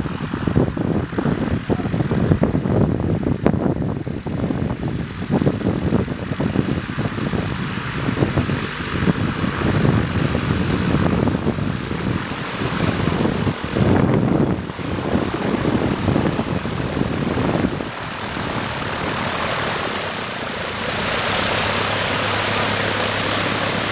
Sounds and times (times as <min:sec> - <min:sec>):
Fixed-wing aircraft, airplane: 0:00.0 - 0:23.9
Wind: 0:00.0 - 0:23.9.